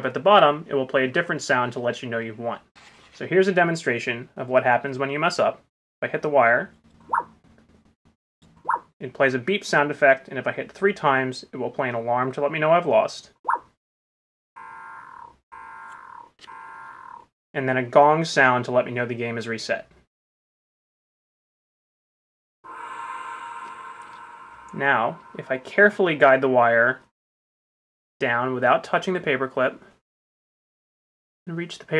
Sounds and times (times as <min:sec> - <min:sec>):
Speech: 0:00.0 - 0:06.7, 0:09.0 - 0:13.4, 0:17.6 - 0:19.9, 0:24.8 - 0:27.0, 0:28.2 - 0:30.0, 0:31.5 - 0:31.9.